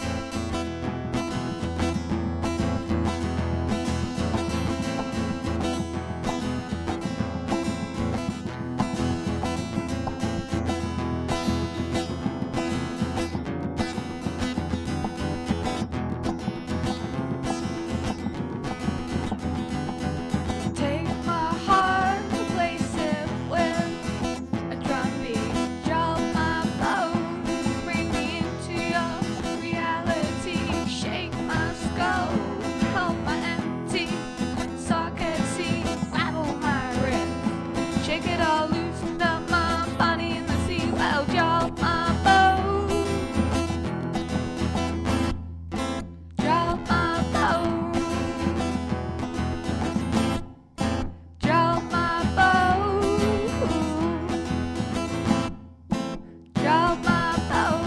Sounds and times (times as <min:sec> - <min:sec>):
Music: 0:00.0 - 0:57.8.